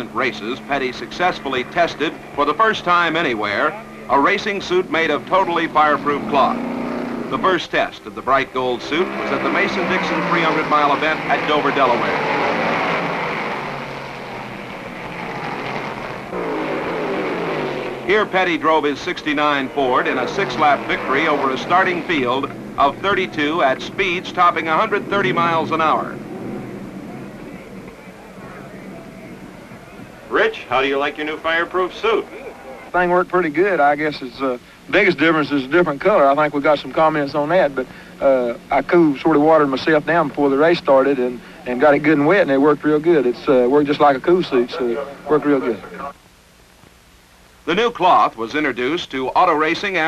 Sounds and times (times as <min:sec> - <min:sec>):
Speech: 0:00.0 - 0:06.6, 0:07.3 - 0:12.6, 0:18.1 - 0:26.2, 0:30.0 - 0:46.2, 0:47.7 - 0:50.0
Car: 0:00.0 - 0:32.3, 0:35.2 - 0:46.1.